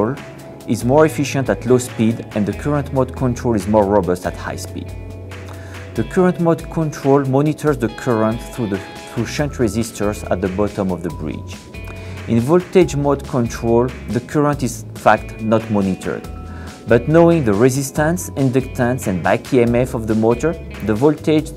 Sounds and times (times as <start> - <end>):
Speech: 0.0 - 4.9, 6.0 - 11.6, 12.3 - 16.3, 16.9 - 21.5
Music: 0.0 - 21.5.